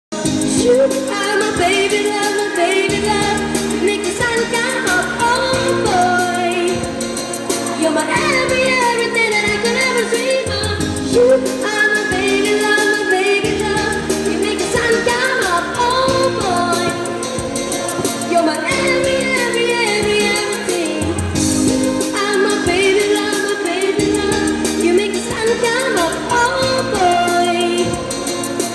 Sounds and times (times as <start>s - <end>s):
Music of Asia: 0.1s - 28.7s
Singing: 0.2s - 28.7s.